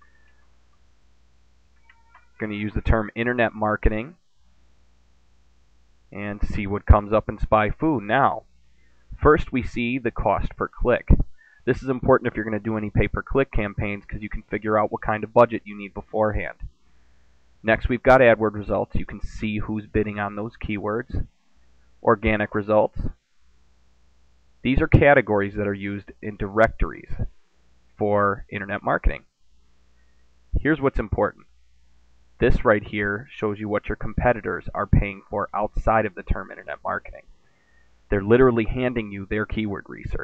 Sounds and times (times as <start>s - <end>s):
Speech: 1.9s - 4.2s, 6.1s - 8.5s, 9.2s - 16.7s, 17.6s - 21.3s, 22.0s - 23.2s, 24.6s - 27.4s, 28.0s - 29.3s, 30.6s - 31.5s, 32.4s - 37.3s, 38.1s - 40.2s.